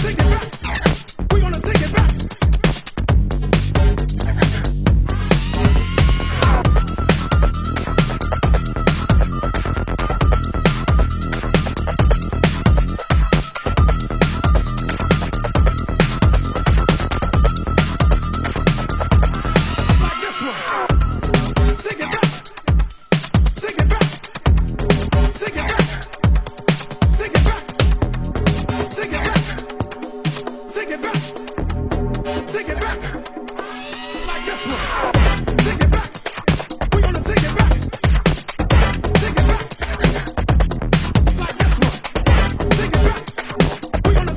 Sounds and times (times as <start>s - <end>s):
Funk: 0.0s - 33.7s, 34.8s - 44.3s
Disco: 0.0s - 44.3s.